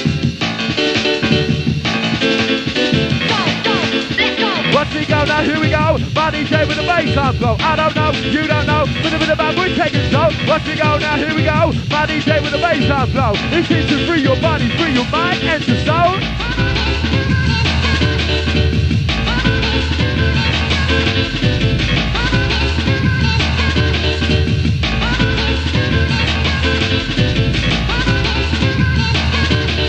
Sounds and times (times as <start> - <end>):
Electronic music: 0.0 - 18.5.